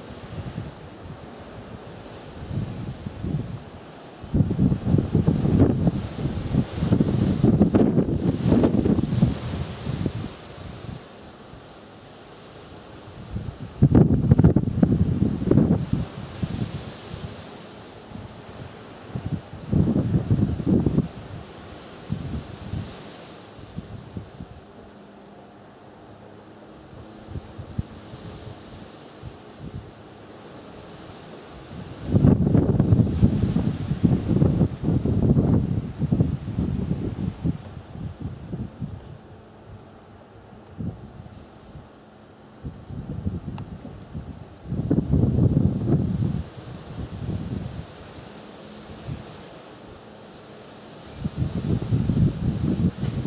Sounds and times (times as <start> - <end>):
Rustling leaves: 0.0 - 53.2.